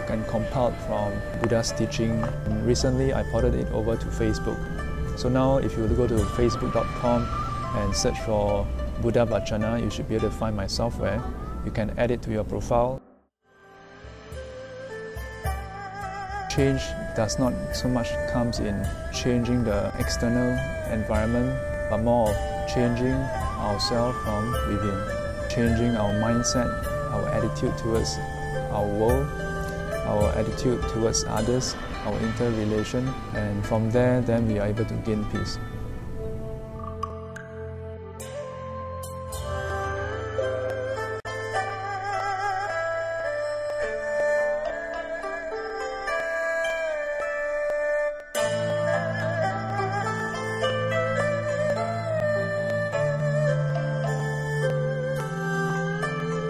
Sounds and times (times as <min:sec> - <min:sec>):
Music: 0:00.0 - 0:56.4.